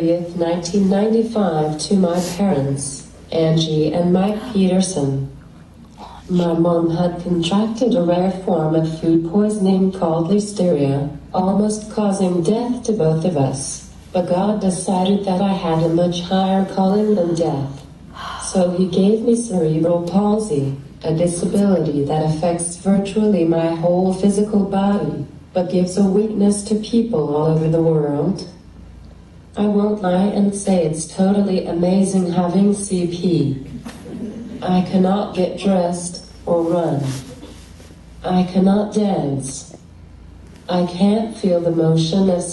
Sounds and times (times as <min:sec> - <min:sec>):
Female speech, woman speaking: 0:00.0 - 0:05.4, 0:06.0 - 0:28.6, 0:29.6 - 0:33.7, 0:34.6 - 0:37.4, 0:38.2 - 0:39.8, 0:40.7 - 0:42.5
Narration, monologue: 0:00.0 - 0:42.5.